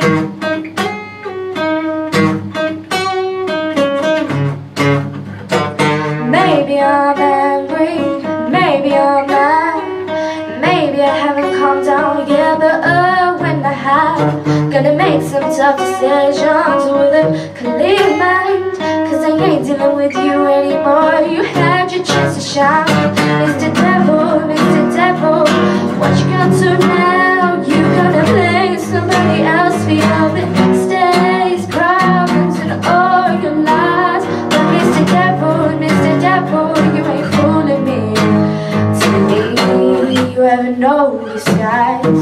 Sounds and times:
Independent music: 0.0 - 42.2.

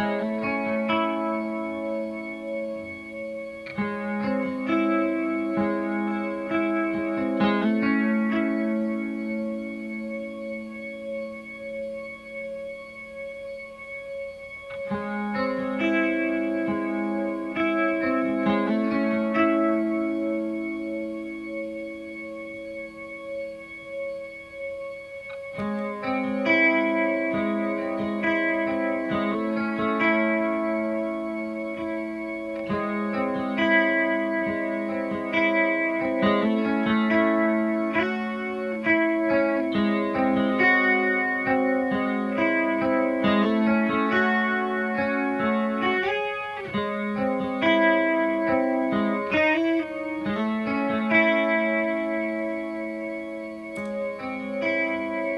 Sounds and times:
Distortion: 0.0 - 55.3
Music: 0.0 - 55.3.

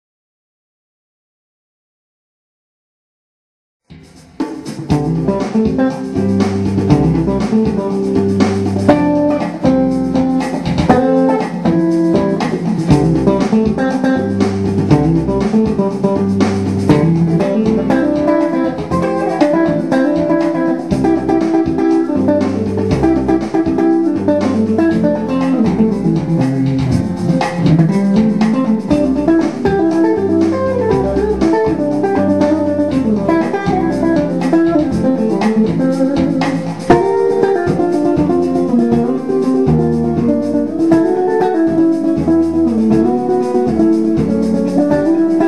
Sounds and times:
Electric guitar: 4.0 - 45.4.

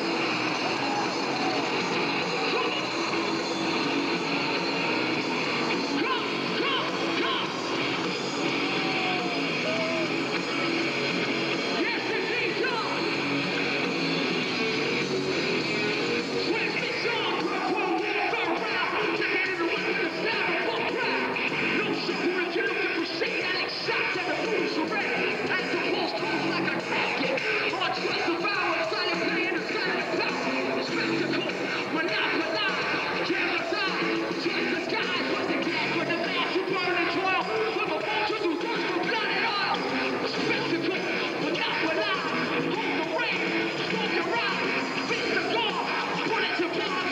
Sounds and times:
Music: 0.0 - 47.1
Speech: 5.9 - 7.6, 11.8 - 13.1, 16.4 - 47.1.

